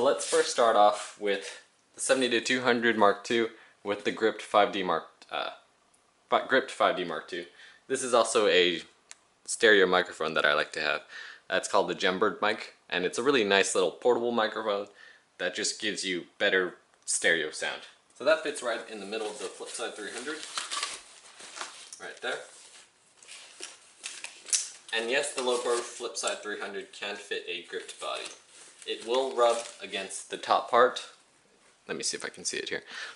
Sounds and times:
Speech: 0.0 - 5.7, 6.3 - 20.5, 22.0 - 22.5, 24.9 - 31.2, 31.9 - 33.1.

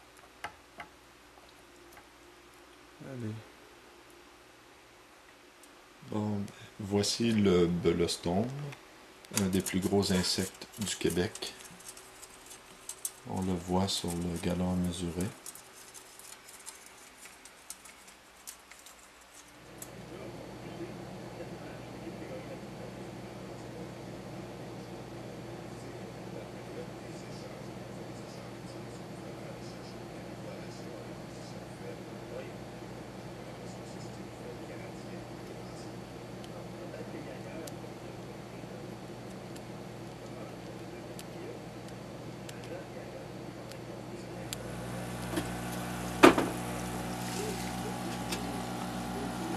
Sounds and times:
Speech: 3.0 - 3.5, 6.0 - 11.6, 13.2 - 15.4, 19.9 - 45.5, 46.7 - 49.5.

